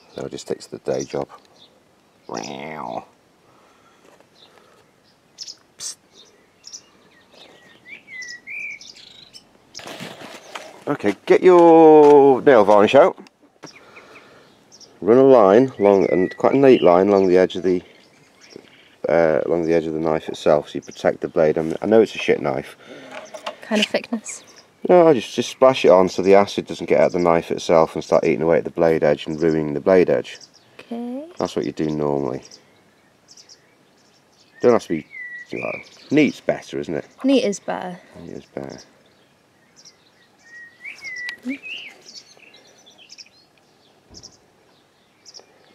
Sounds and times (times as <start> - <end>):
Chirp, tweet: 4.4 - 10.6, 13.6 - 19.0, 29.2 - 30.8, 31.4 - 37.2, 38.2 - 45.7.